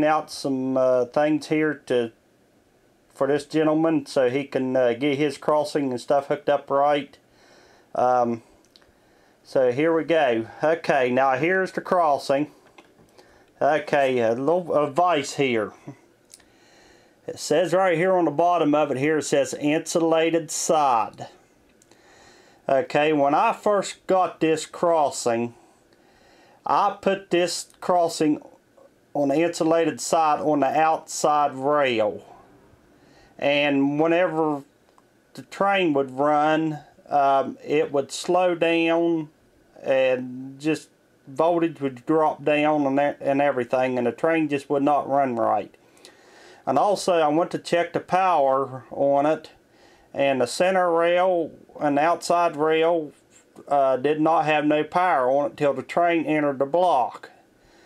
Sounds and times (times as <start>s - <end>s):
Speech: 0.0s - 2.2s, 3.1s - 7.2s, 8.0s - 8.5s, 9.4s - 12.6s, 13.6s - 16.0s, 17.3s - 21.4s, 22.7s - 25.6s, 26.6s - 28.6s, 29.2s - 32.4s, 33.4s - 34.7s, 35.3s - 45.8s, 46.7s - 49.6s, 50.2s - 57.4s.